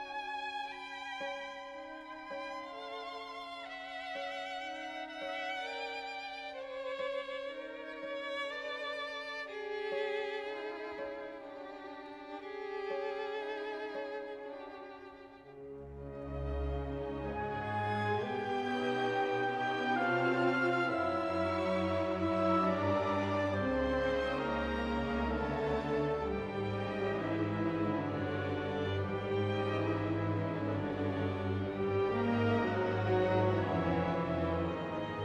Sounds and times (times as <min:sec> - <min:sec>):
Violin, fiddle: 0:00.0 - 0:35.2.